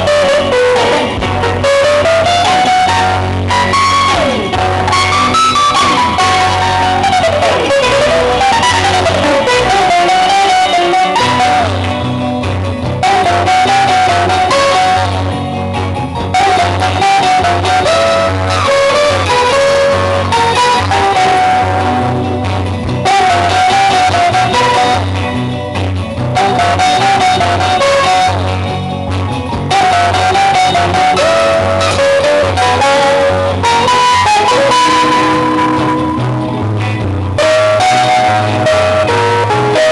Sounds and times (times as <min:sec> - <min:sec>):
Strum: 0:00.0 - 0:39.9.